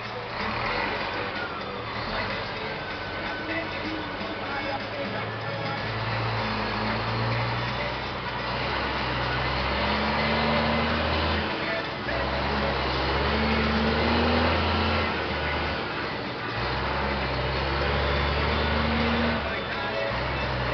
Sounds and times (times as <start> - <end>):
Music: 0.0 - 20.7
Truck: 0.0 - 20.7.